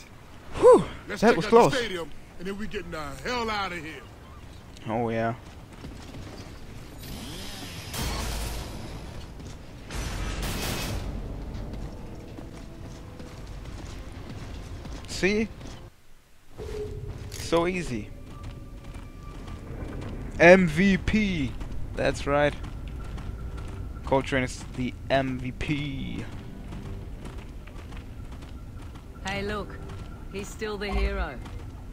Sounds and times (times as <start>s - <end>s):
Music: 10.1s - 15.9s, 22.2s - 31.9s.